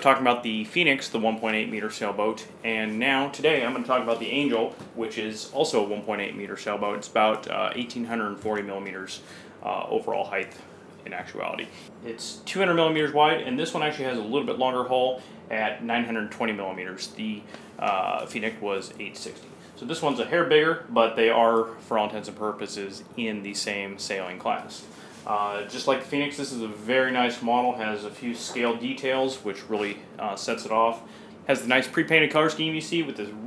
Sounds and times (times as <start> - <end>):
Speech: 0.0 - 33.4.